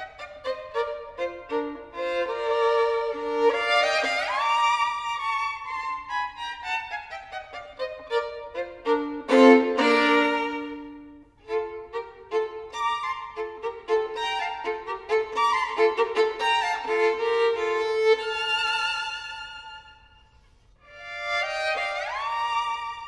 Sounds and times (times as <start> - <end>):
Violin, fiddle: 0.0 - 23.0.